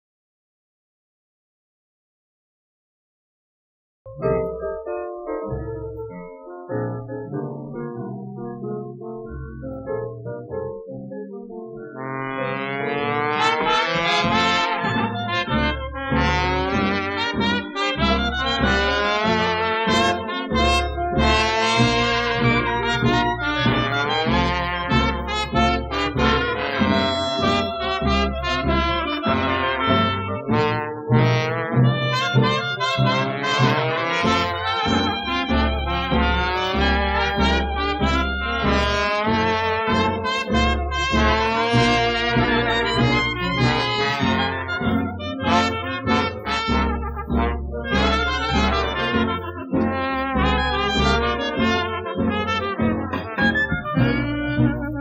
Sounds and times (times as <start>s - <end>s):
Music: 4.1s - 55.0s.